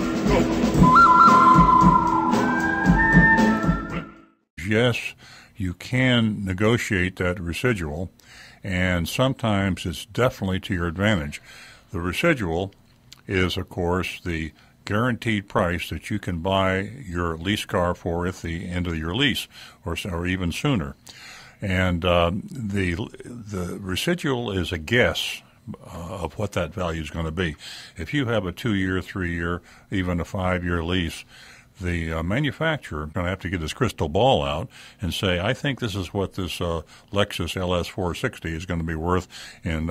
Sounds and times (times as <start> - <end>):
Speech: 0.2 - 0.5, 4.6 - 21.0, 21.6 - 39.9.